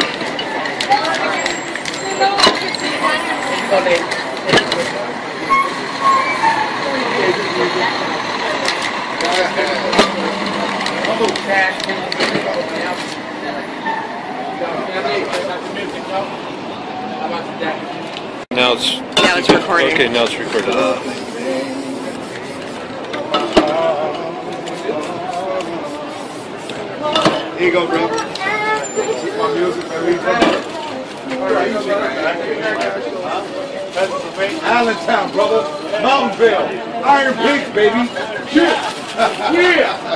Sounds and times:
Spray: 20.8s - 23.0s, 24.7s - 26.8s.

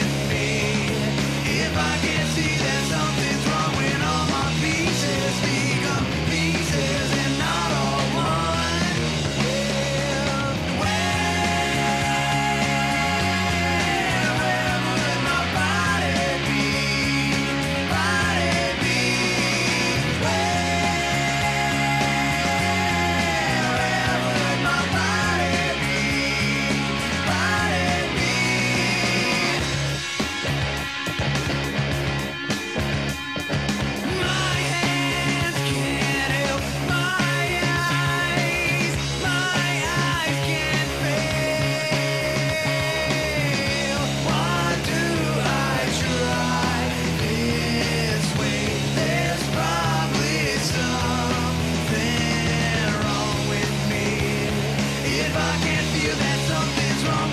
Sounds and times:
Music: 0.0s - 57.3s.

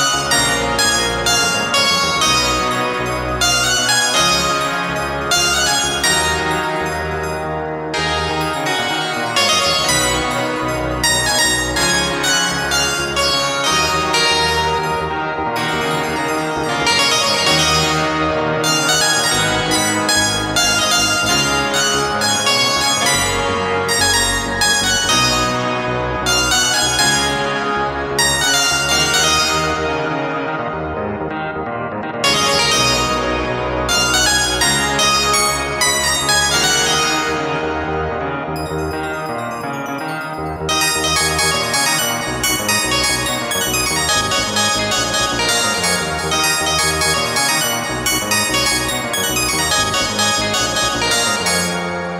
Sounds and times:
Music: 0.0s - 52.1s.

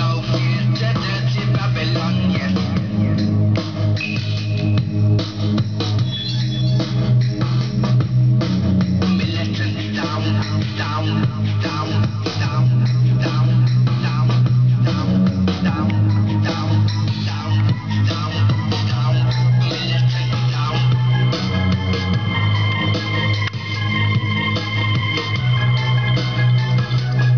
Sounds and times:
Music: 0.0s - 27.3s.

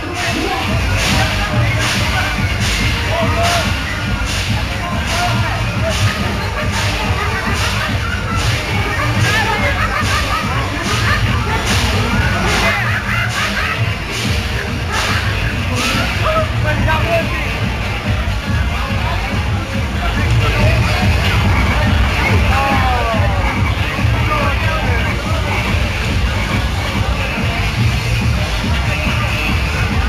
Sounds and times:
Music: 0.0s - 30.0s
Speech: 0.0s - 30.0s.

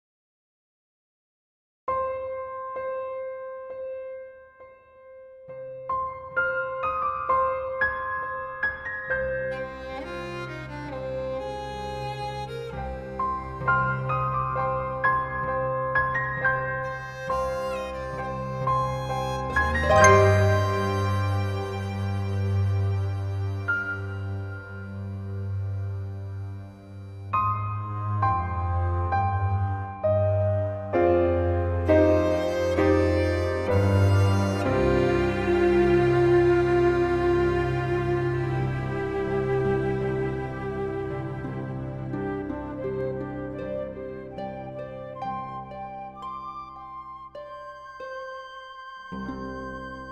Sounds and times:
Cello: 8.7s - 46.5s, 49.1s - 50.1s.

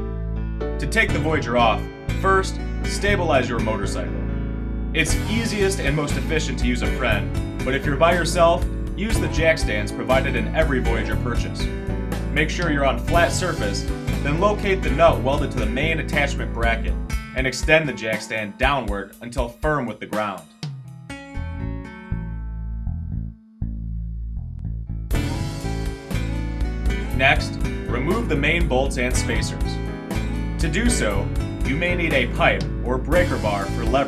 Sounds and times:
Music: 0.0s - 34.0s
Speech: 0.8s - 4.1s, 5.0s - 11.6s, 12.4s - 20.5s, 27.1s - 29.8s, 30.6s - 34.0s.

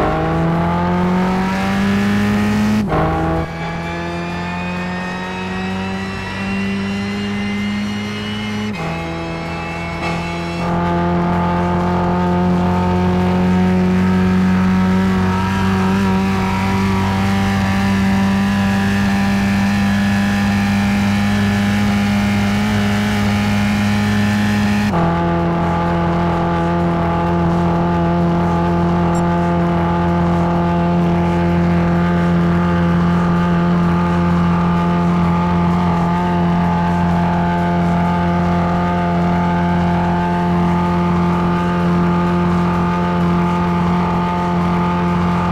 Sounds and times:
Music: 0.0s - 45.5s.

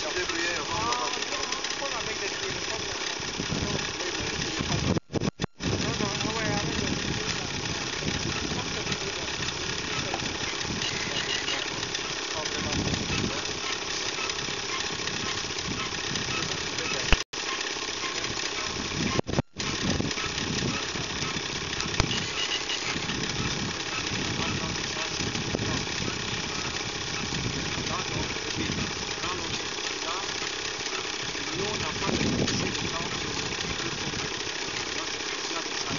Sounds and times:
Speech: 0.0s - 4.9s, 5.8s - 10.4s, 11.0s - 13.5s, 24.4s - 25.9s, 27.9s - 30.3s, 31.4s - 34.2s, 34.8s - 35.9s.

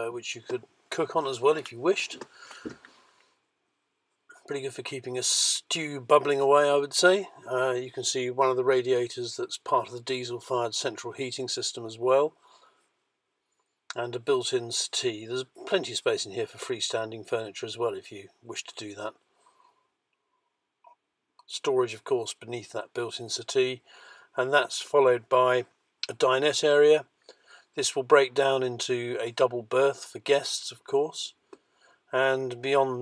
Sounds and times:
Speech: 0.0s - 2.3s, 4.3s - 12.4s, 13.9s - 19.2s, 21.4s - 27.1s, 27.8s - 31.4s, 32.1s - 33.0s.

